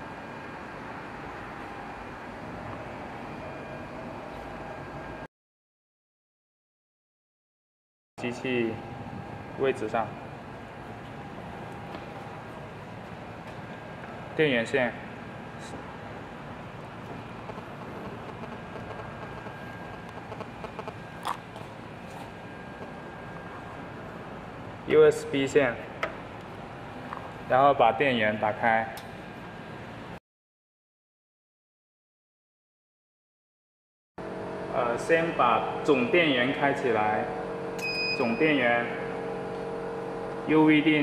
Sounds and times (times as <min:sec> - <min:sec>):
Speech: 0:08.2 - 0:08.9, 0:09.6 - 0:10.2, 0:14.4 - 0:15.0, 0:24.9 - 0:25.8, 0:27.5 - 0:29.0, 0:34.7 - 0:37.4, 0:38.2 - 0:39.1, 0:40.5 - 0:41.0.